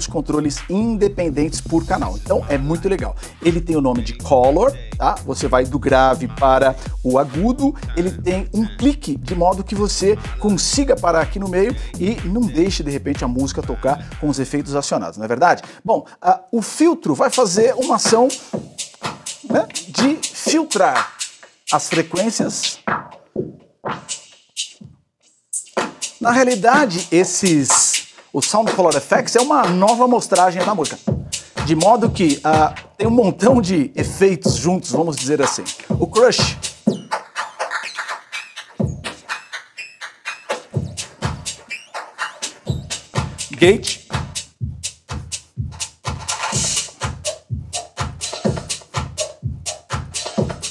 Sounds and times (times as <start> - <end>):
Music: 0.0 - 16.0, 16.6 - 50.7
Speech: 0.0 - 18.4, 19.5 - 21.1, 21.7 - 22.8, 26.2 - 36.6, 43.5 - 44.0.